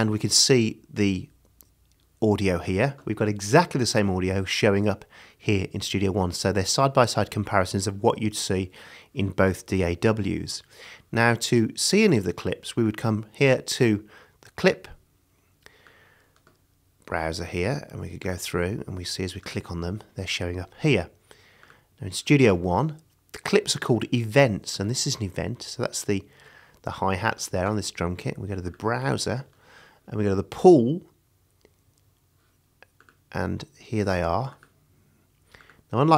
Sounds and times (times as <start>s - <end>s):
Speech: 0.0s - 1.4s, 2.2s - 15.0s, 17.1s - 21.2s, 22.0s - 29.5s, 30.1s - 31.2s, 33.3s - 34.7s, 35.9s - 36.1s.